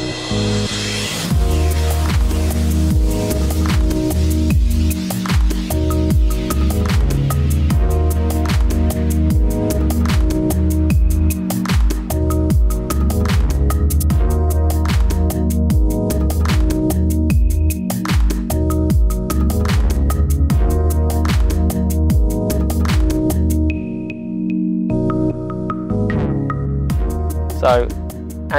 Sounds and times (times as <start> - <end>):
Music: 0.0 - 28.5.